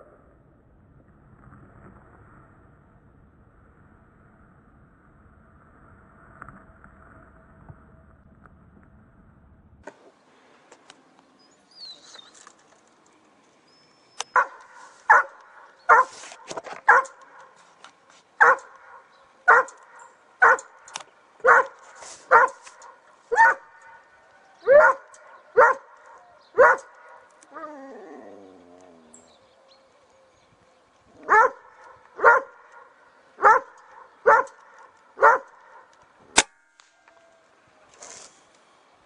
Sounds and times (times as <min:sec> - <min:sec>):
Bird: 0:11.0 - 0:17.7, 0:18.4 - 0:35.9.